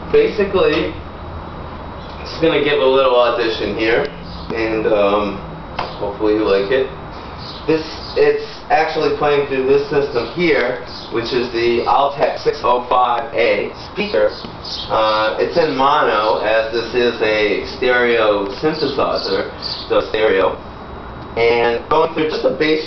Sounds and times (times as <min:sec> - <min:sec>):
Speech: 0:00.1 - 0:01.0, 0:02.2 - 0:05.4, 0:06.0 - 0:07.0, 0:07.7 - 0:20.6, 0:21.4 - 0:22.8.